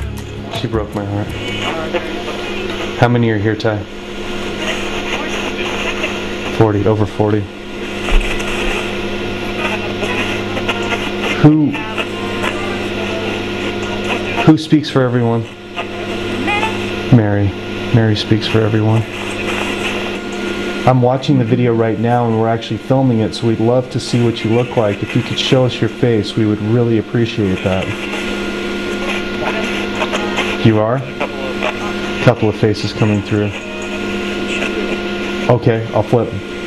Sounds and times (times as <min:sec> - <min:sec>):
Speech: 0:00.5 - 0:03.9, 0:04.6 - 0:07.5, 0:09.6 - 0:15.5, 0:16.5 - 0:19.1, 0:20.9 - 0:28.0, 0:29.1 - 0:33.6, 0:34.5 - 0:36.4.